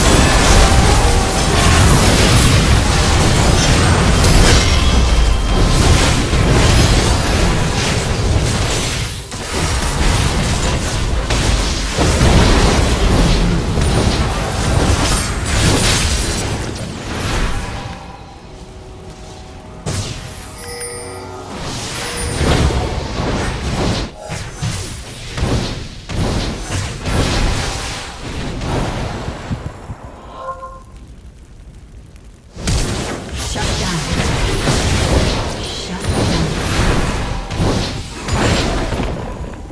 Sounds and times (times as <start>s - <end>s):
Speech: 33.5s - 34.2s, 35.5s - 36.6s.